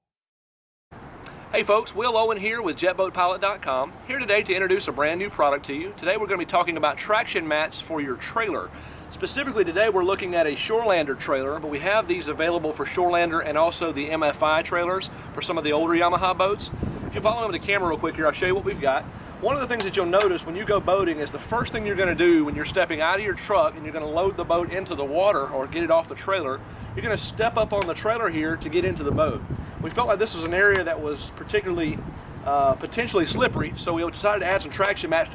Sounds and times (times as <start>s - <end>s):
Speech: 1.5s - 35.3s.